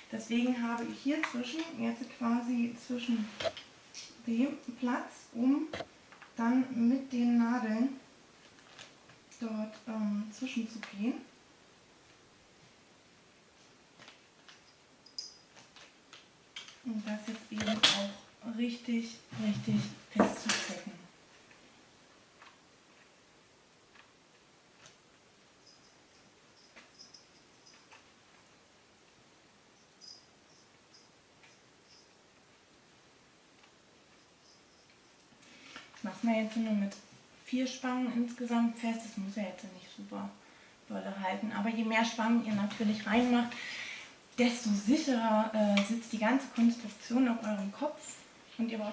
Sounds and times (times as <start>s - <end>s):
Speech: 0.1s - 5.8s, 6.4s - 8.0s, 9.4s - 11.3s, 16.9s - 21.1s, 36.0s - 43.6s, 44.4s - 48.9s.